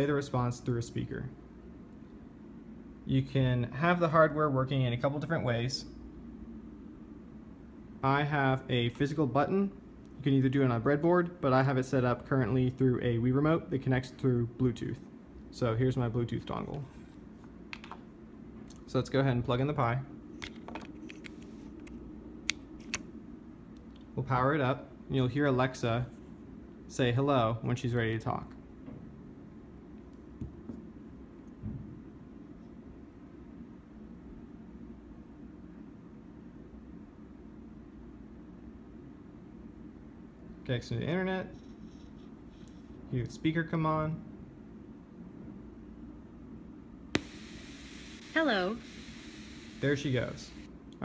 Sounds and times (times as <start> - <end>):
Speech: 0.0 - 1.4, 3.1 - 5.9, 8.0 - 16.9, 18.9 - 20.1, 24.2 - 26.1, 26.9 - 28.6, 40.6 - 41.6, 43.1 - 44.2, 48.4 - 48.8, 49.8 - 51.0.